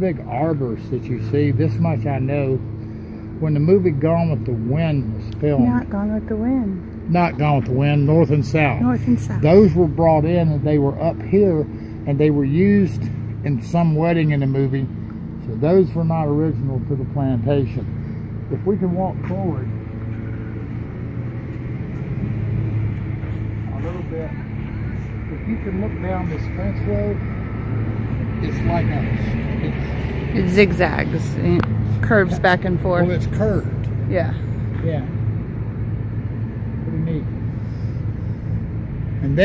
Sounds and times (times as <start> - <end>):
Outside, urban or manmade: 0.0 - 39.4.